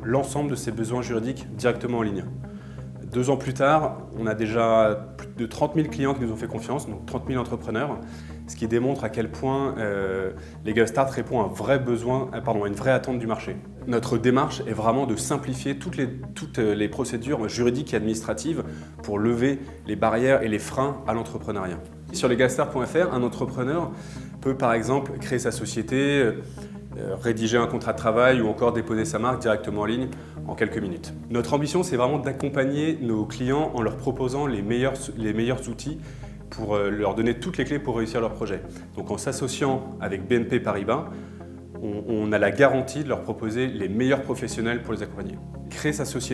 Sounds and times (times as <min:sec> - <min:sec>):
Speech: 0:00.0 - 0:02.4, 0:03.0 - 0:26.4, 0:27.0 - 0:41.1, 0:41.8 - 0:46.3
Music: 0:00.0 - 0:46.3.